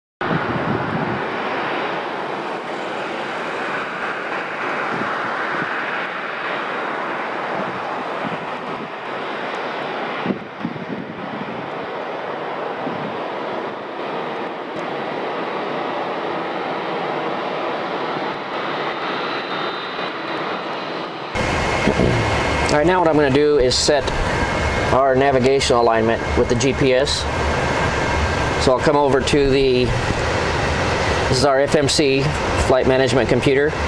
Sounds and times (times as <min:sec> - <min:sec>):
Aircraft engine: 0:00.2 - 0:33.8.